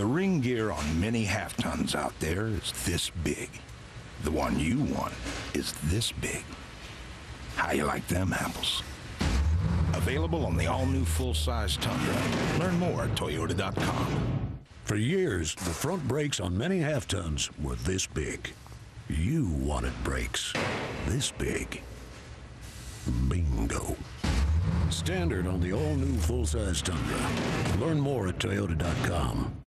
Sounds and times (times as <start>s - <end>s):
Speech: 0.0s - 3.6s, 4.2s - 6.6s, 7.6s - 8.9s, 10.0s - 14.2s, 14.9s - 21.9s, 23.1s - 24.1s, 24.9s - 29.6s.